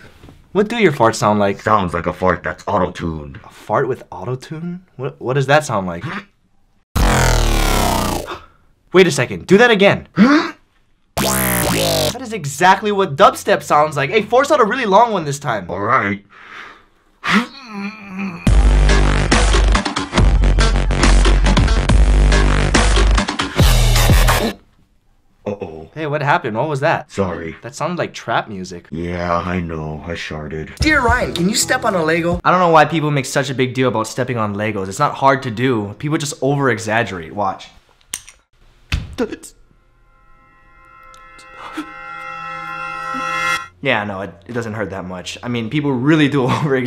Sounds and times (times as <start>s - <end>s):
Inside, small room: 0.0s - 46.8s
Speech: 0.5s - 6.3s, 8.9s - 10.1s, 12.2s - 16.2s, 25.4s - 37.8s, 39.1s - 39.6s, 43.8s - 46.8s
Music: 18.5s - 24.6s, 30.8s - 32.5s, 40.2s - 43.8s.